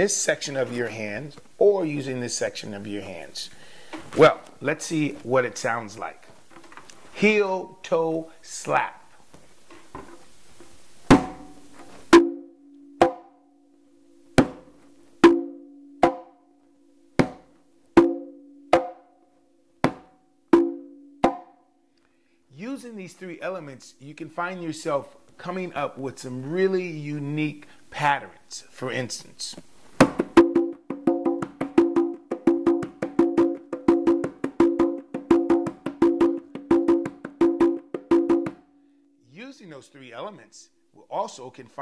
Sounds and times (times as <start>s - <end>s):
Speech: 0.0s - 3.5s, 4.2s - 6.3s, 7.2s - 9.1s, 22.5s - 29.6s, 39.3s - 41.8s
Wood block: 13.0s - 13.3s, 14.4s - 16.4s, 17.2s - 19.1s, 19.8s - 21.6s.